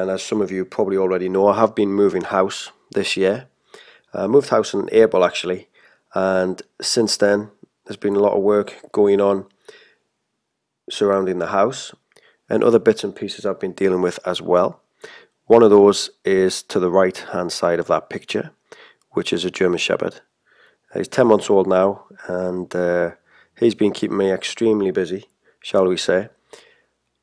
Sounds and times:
Speech: 0.0s - 3.5s, 4.1s - 9.5s, 10.9s - 14.8s, 15.5s - 18.6s, 19.2s - 20.3s, 20.9s - 26.4s.

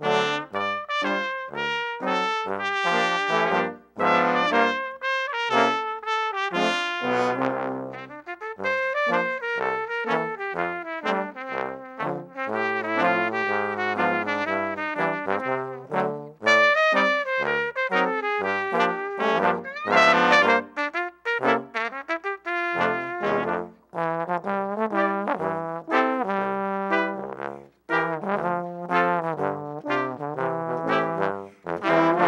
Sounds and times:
Trombone: 0.0s - 32.2s
Trumpet: 0.0s - 32.2s.

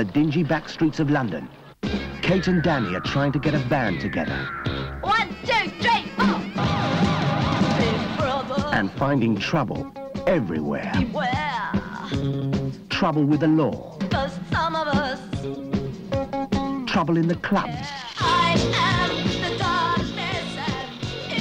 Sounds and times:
Speech: 0.0s - 1.5s, 2.2s - 6.4s, 8.7s - 12.1s, 12.9s - 14.0s, 16.8s - 18.1s
Music: 1.8s - 21.4s.

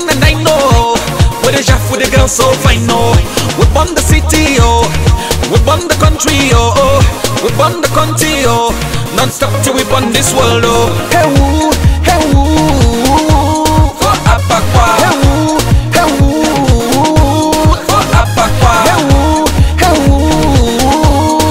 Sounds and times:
Funk: 0.0s - 21.5s.

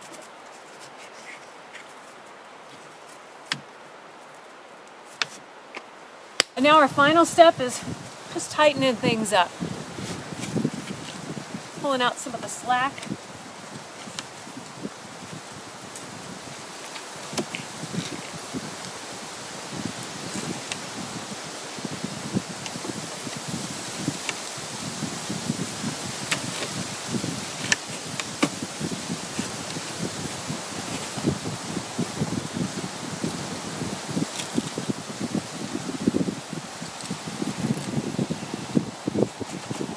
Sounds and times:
Outside, rural or natural: 0.0s - 39.9s.

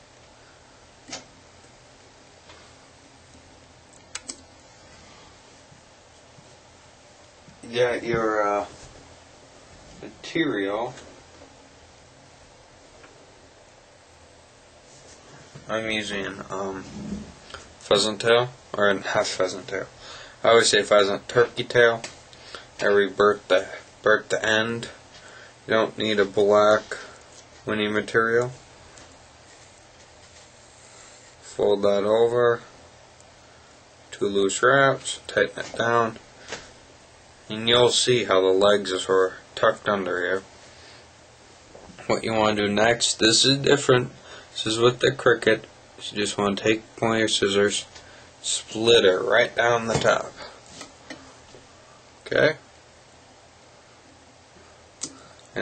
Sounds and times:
Speech: 7.6s - 8.8s, 10.0s - 11.1s, 15.7s - 17.1s, 17.8s - 22.1s, 22.8s - 25.0s, 25.7s - 28.6s, 31.4s - 32.7s, 34.1s - 36.2s, 37.5s - 40.5s, 42.0s - 50.6s, 52.2s - 52.7s.

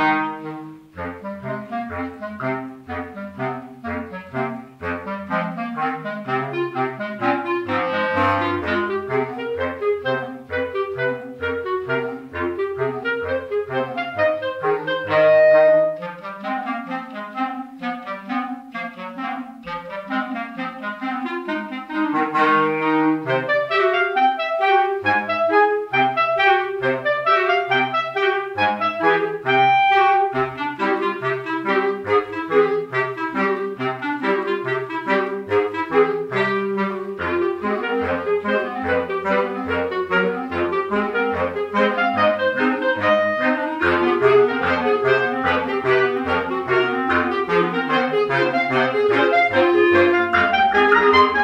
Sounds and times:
Brass instrument: 0.0s - 51.4s
Clarinet: 0.0s - 51.4s
Saxophone: 0.0s - 51.4s.

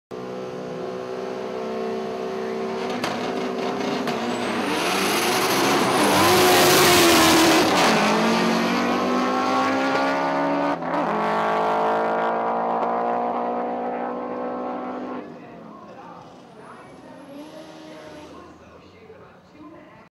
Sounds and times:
Race car, auto racing: 0.1s - 20.0s
Speech: 15.2s - 20.1s.

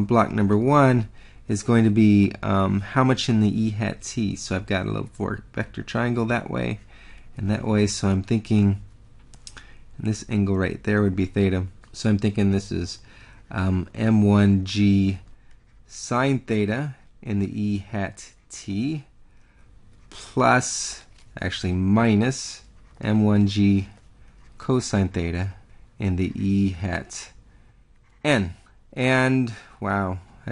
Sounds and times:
Speech: 0.0s - 8.9s, 10.0s - 15.3s, 15.9s - 19.1s, 20.1s - 24.0s, 24.6s - 27.4s, 28.2s - 30.5s.

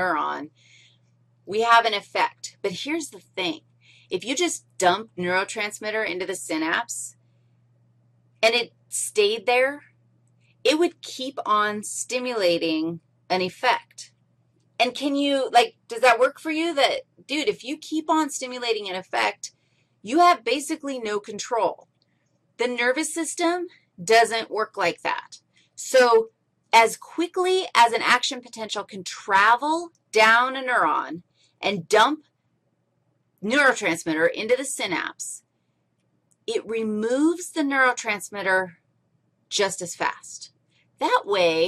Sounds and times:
Speech: 0.0s - 0.5s, 1.5s - 7.1s, 8.4s - 9.8s, 10.7s - 14.1s, 14.8s - 19.5s, 20.1s - 21.8s, 22.6s - 32.2s, 33.4s - 35.4s, 36.5s - 38.7s, 39.5s - 41.6s
Inside, small room: 0.0s - 41.6s.

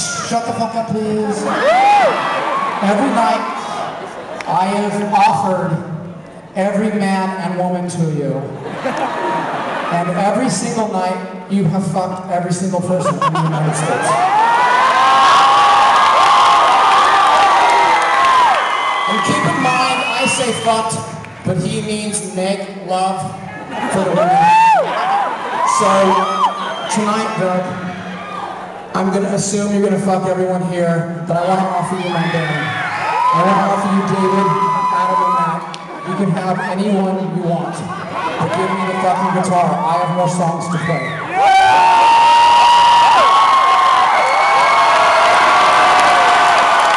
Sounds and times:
Speech: 0.0s - 1.6s, 2.8s - 3.7s, 4.5s - 6.0s, 6.6s - 8.6s, 9.9s - 14.2s, 19.1s - 24.4s, 25.7s - 26.2s, 26.9s - 27.8s, 29.0s - 32.8s, 33.4s - 41.1s.

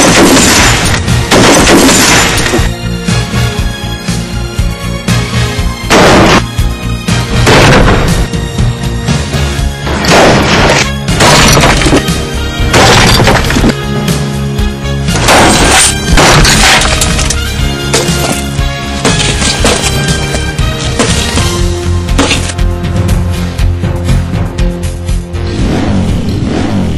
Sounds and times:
Smash, crash: 0.0s - 2.8s, 5.9s - 6.5s, 7.4s - 8.3s, 9.9s - 13.8s, 15.2s - 21.6s, 22.2s - 22.6s
Music: 0.0s - 26.9s.

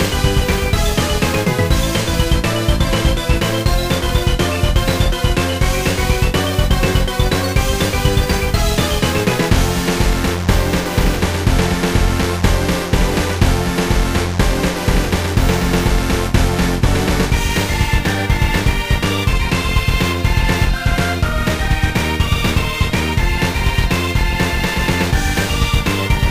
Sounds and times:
Music: 0.0s - 26.3s.

